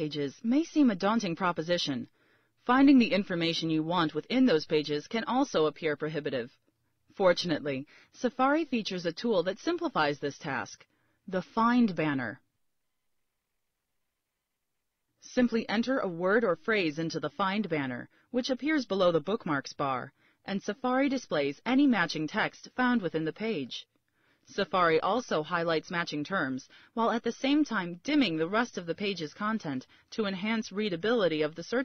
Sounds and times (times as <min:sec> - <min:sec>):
Narration, monologue: 0:00.0 - 0:31.8.